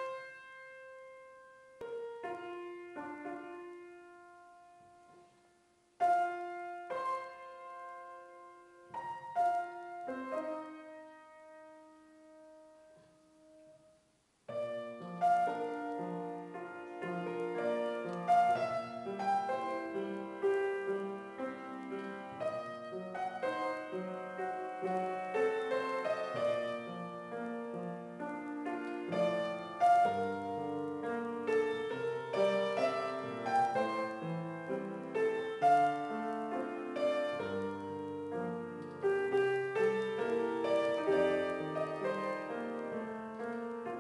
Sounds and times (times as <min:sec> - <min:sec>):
Piano: 0:00.0 - 0:44.0.